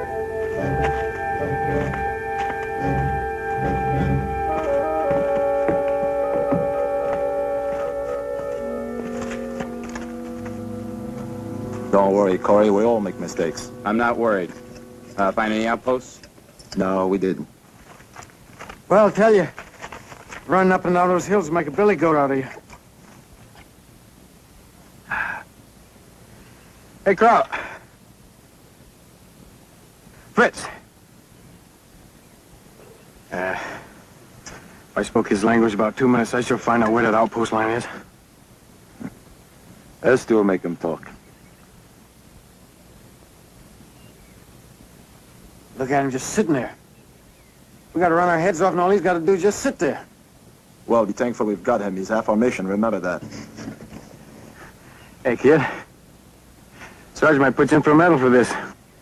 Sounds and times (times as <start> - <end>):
Speech: 11.9 - 14.5, 15.2 - 17.5, 18.9 - 19.6, 20.5 - 22.6, 27.0 - 27.6, 30.4 - 30.8, 35.0 - 38.0, 40.0 - 41.2, 45.8 - 46.8, 48.0 - 50.1, 50.9 - 53.2, 55.3 - 55.9, 57.2 - 58.8.